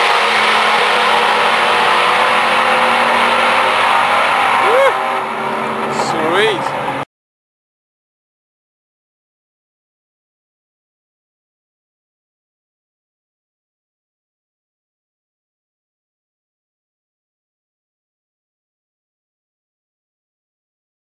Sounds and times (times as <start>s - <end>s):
Car: 0.0s - 7.1s
Speech: 5.9s - 6.7s.